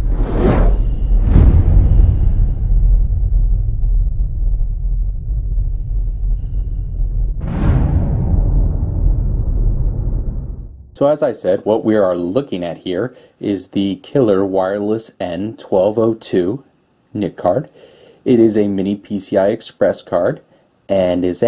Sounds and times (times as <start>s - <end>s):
Speech: 11.0s - 21.4s.